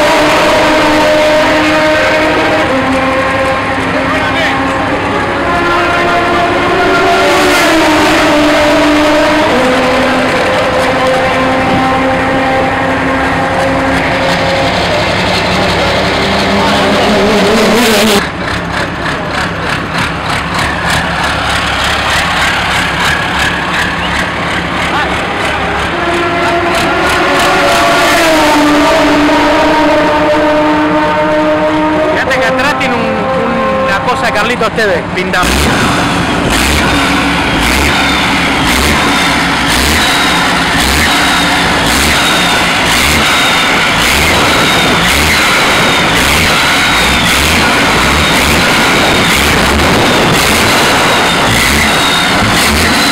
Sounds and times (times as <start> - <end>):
Truck: 0.0 - 53.1
Speech: 3.9 - 5.2, 24.9 - 25.2, 32.2 - 35.5.